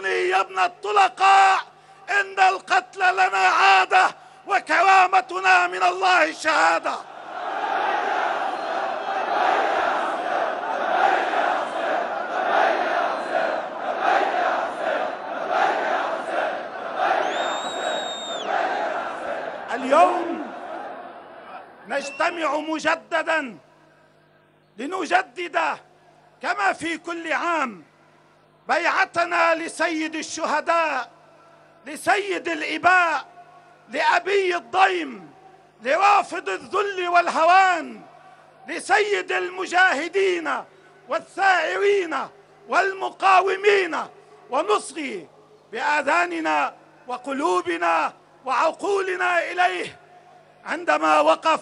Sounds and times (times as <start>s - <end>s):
Speech: 0.0s - 7.0s, 19.7s - 20.5s, 21.9s - 23.7s, 24.8s - 27.9s, 28.7s - 38.1s, 38.7s - 50.0s, 50.6s - 51.6s.